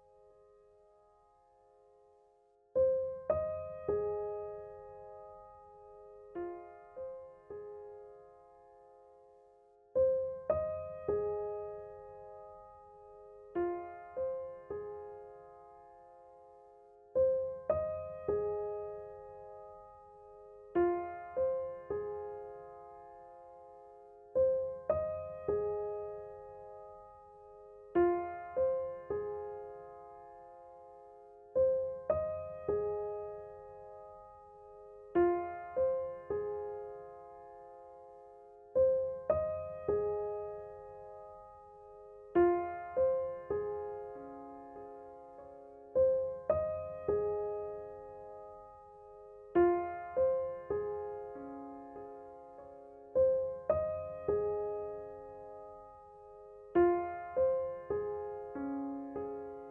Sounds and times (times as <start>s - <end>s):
Music: 0.0s - 59.7s.